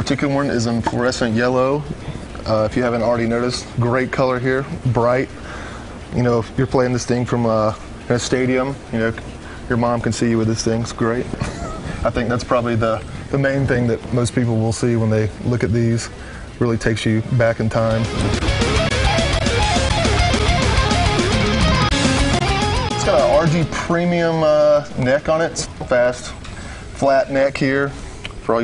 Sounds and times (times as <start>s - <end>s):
Speech: 0.0s - 5.3s, 6.1s - 11.3s, 12.0s - 18.1s, 23.0s - 26.4s, 27.0s - 28.6s
Electric guitar: 17.9s - 23.9s.